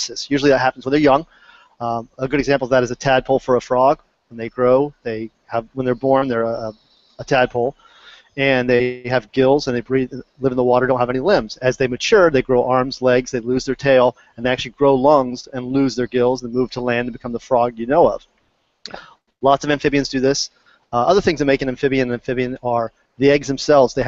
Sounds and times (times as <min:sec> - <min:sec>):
Speech: 0:00.0 - 0:07.8, 0:08.4 - 0:18.2, 0:18.9 - 0:24.0.